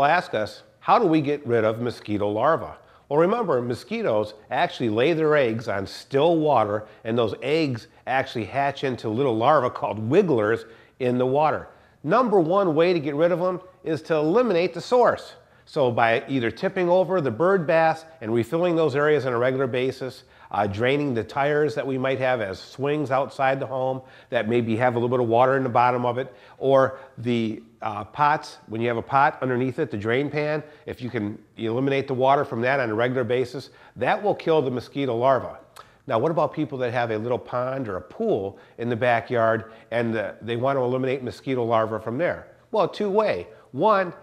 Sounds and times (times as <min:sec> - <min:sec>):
Speech: 0:00.0 - 0:44.2.